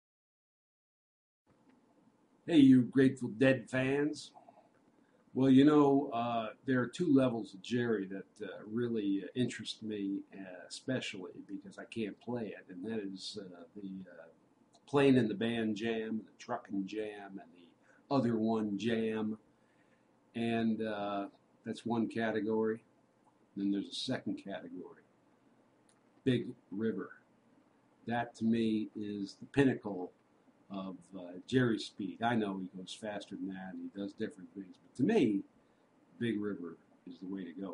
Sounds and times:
Speech: 2.5 - 4.4, 5.4 - 14.3, 14.9 - 17.5, 18.1 - 19.4, 20.4 - 22.8, 23.6 - 25.0, 26.3 - 27.2, 28.1 - 30.1, 30.7 - 35.4, 36.2 - 37.7.

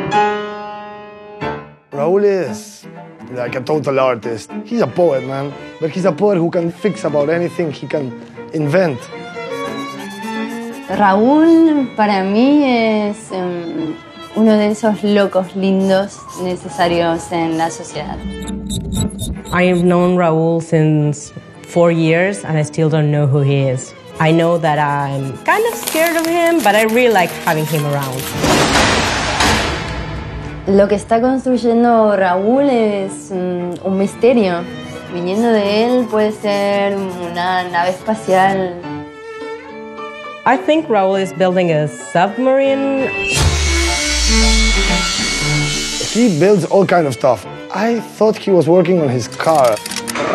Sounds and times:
Music: 0.0 - 50.3.

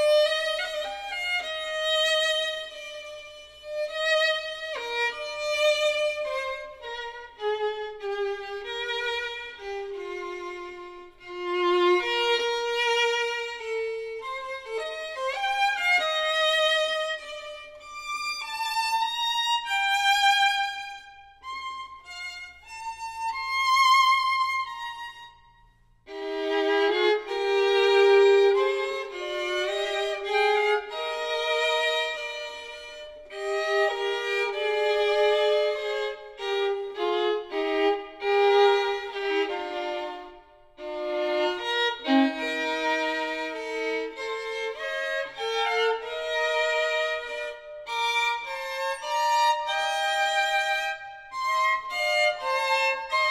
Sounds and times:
Violin, fiddle: 0.0 - 53.3.

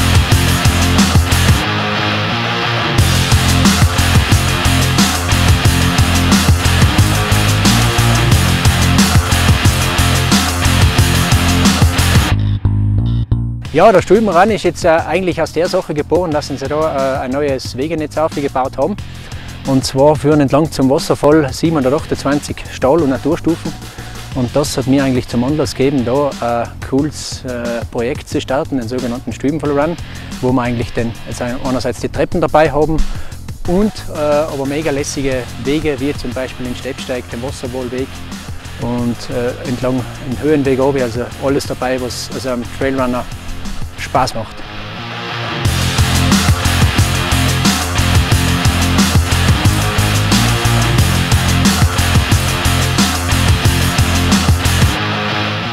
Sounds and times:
Music: 0.0 - 55.7
Speech: 13.7 - 19.0, 19.6 - 23.8, 24.4 - 38.1, 38.8 - 43.3, 44.0 - 44.7.

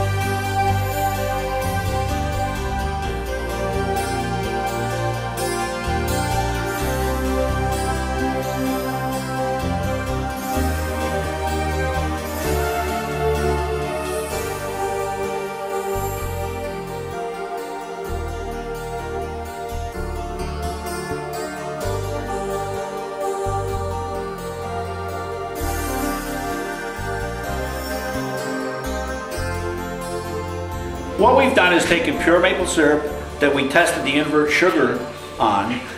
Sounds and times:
Harpsichord: 0.0 - 35.9.

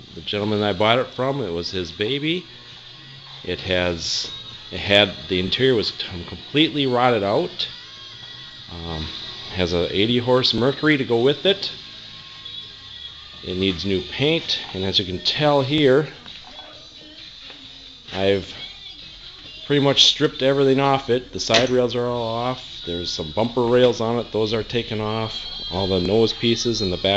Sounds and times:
Music: 0.0 - 27.1
Speech: 0.2 - 2.4, 3.5 - 7.7, 8.7 - 11.8, 13.4 - 16.8, 18.1 - 18.6, 19.7 - 27.1.

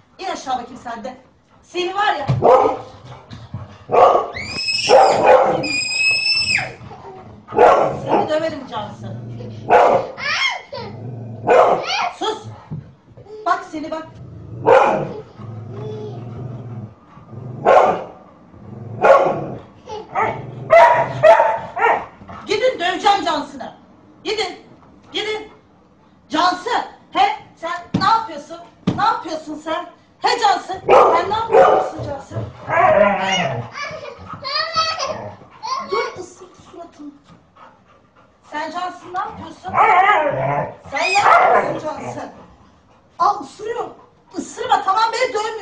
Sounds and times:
Bow-wow: 2.4 - 2.9, 3.9 - 5.8, 7.5 - 8.3, 9.7 - 10.2, 11.4 - 12.0, 14.6 - 15.2, 17.6 - 18.2, 19.0 - 22.1, 30.9 - 32.0, 32.7 - 33.7, 39.7 - 42.1
Yip: 4.0 - 6.7, 20.2 - 22.0, 41.0 - 41.7.

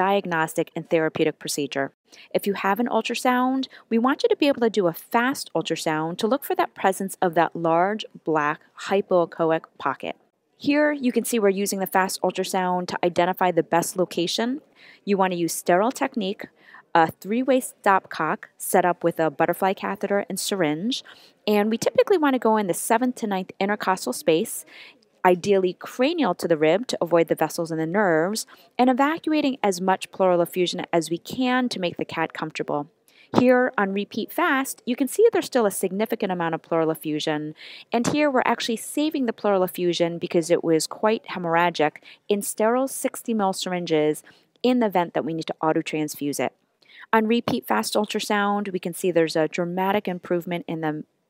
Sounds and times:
Speech: 0.0 - 46.5, 47.2 - 51.1.

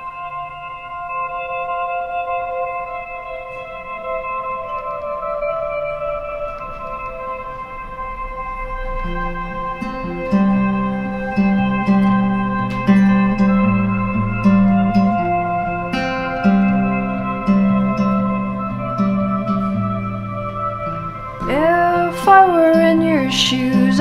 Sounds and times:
Music: 0.0 - 24.0.

